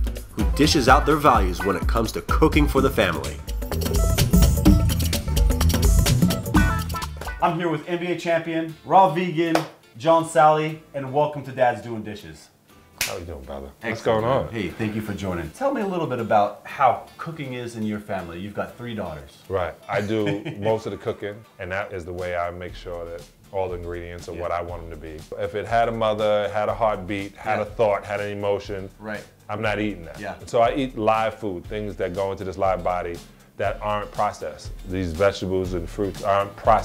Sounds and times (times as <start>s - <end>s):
Music: 0.0s - 36.8s
Speech: 0.6s - 3.4s, 7.4s - 12.5s, 13.1s - 36.8s.